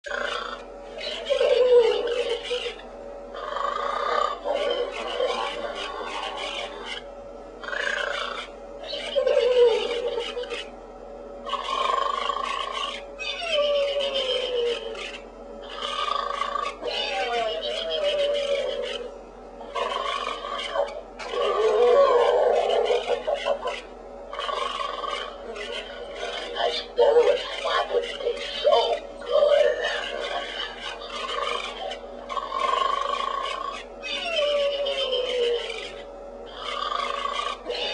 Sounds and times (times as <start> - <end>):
Pig: 0.1 - 10.7, 11.4 - 37.9.